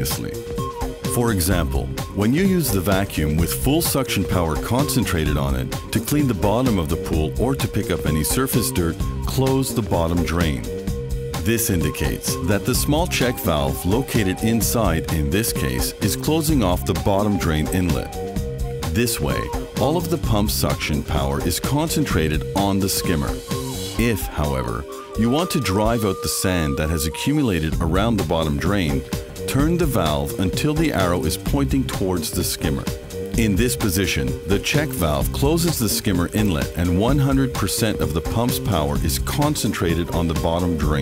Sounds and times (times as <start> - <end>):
Speech: 0.0 - 0.4, 1.1 - 10.8, 11.4 - 18.2, 18.9 - 23.4, 24.0 - 41.0
Music: 0.0 - 41.0.